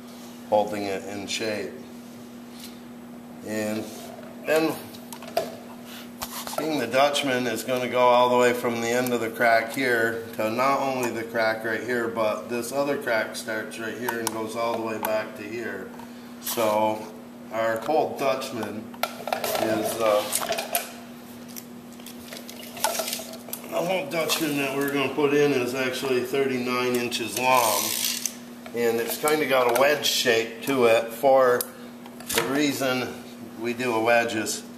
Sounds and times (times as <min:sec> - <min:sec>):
Speech: 0:00.5 - 0:01.8, 0:03.4 - 0:04.9, 0:06.6 - 0:15.9, 0:16.5 - 0:18.9, 0:19.5 - 0:20.5, 0:23.7 - 0:28.0, 0:28.7 - 0:31.7, 0:32.3 - 0:34.7.